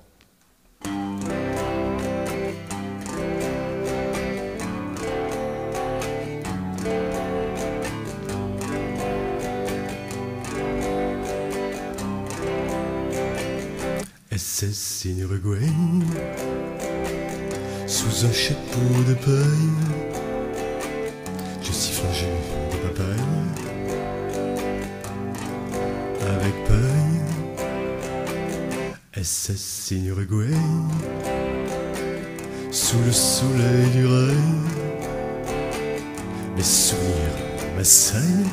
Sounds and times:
Electric guitar: 0.0 - 14.4, 15.4 - 29.2, 30.2 - 38.5.

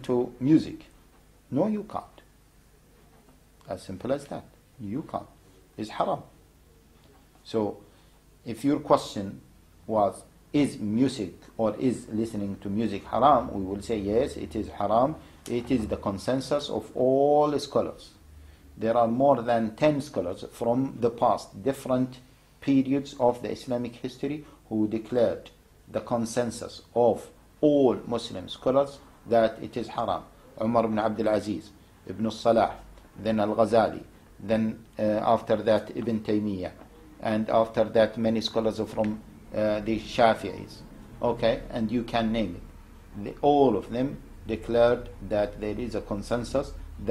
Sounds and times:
Speech: 0.0 - 2.3, 3.6 - 6.4, 7.4 - 18.2, 18.8 - 47.1.

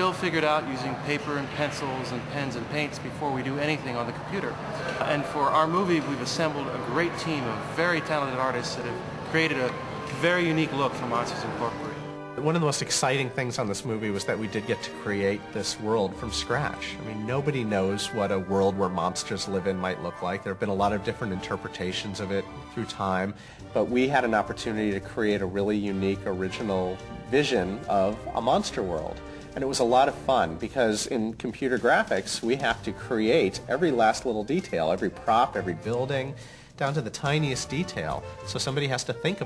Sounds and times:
Music: 0.0 - 39.4
Speech: 0.0 - 39.4.

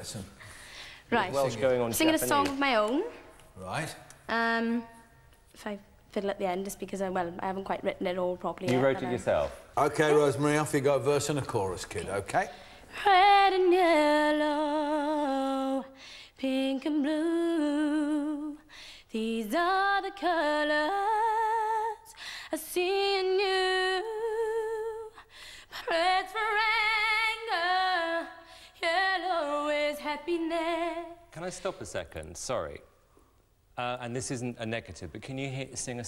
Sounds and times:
Speech: 7.9 - 12.5.

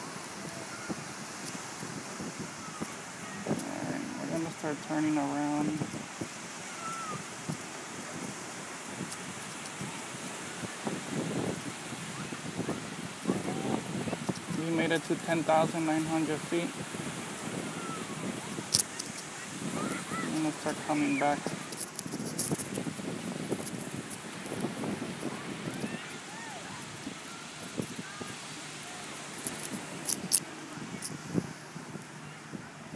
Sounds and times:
Ocean: 0.0 - 32.9
Outside, rural or natural: 0.0 - 32.9.

